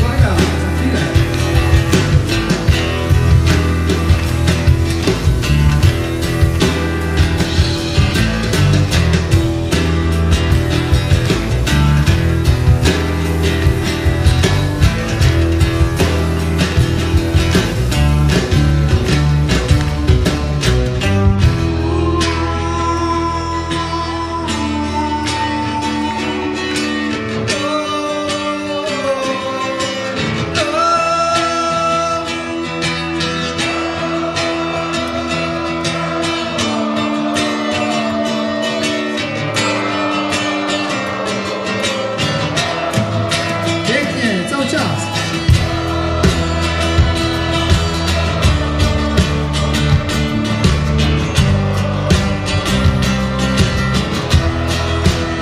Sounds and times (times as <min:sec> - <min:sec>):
Music: 0:00.0 - 0:55.4.